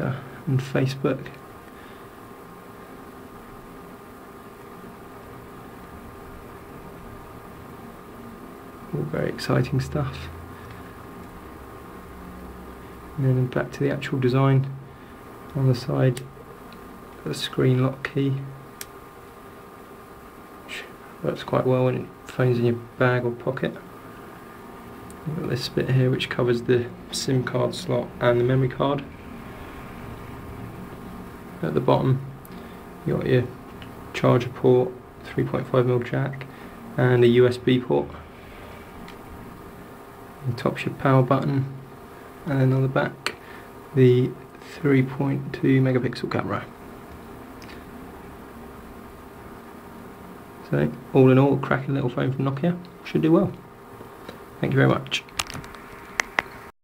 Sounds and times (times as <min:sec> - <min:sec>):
Speech: 0:00.0 - 0:01.4, 0:08.9 - 0:10.4, 0:13.2 - 0:14.8, 0:15.5 - 0:16.3, 0:17.2 - 0:18.6, 0:20.7 - 0:23.9, 0:25.2 - 0:29.1, 0:31.6 - 0:32.3, 0:33.0 - 0:38.2, 0:40.4 - 0:41.8, 0:42.4 - 0:46.8, 0:50.6 - 0:53.6, 0:54.6 - 0:55.3
Inside, small room: 0:00.0 - 0:56.8.